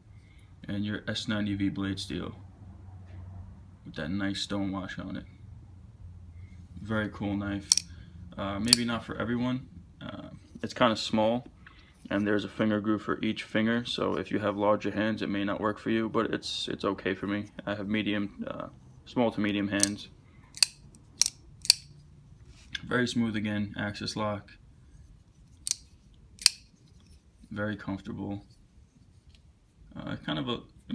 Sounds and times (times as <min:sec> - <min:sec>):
Speech: 0:00.6 - 0:02.4, 0:03.9 - 0:05.3, 0:06.8 - 0:07.7, 0:08.4 - 0:11.5, 0:12.1 - 0:20.1, 0:22.8 - 0:24.6, 0:27.5 - 0:28.5, 0:29.9 - 0:30.9
Tools: 0:07.7 - 0:07.9, 0:20.6 - 0:21.9, 0:25.6 - 0:27.2.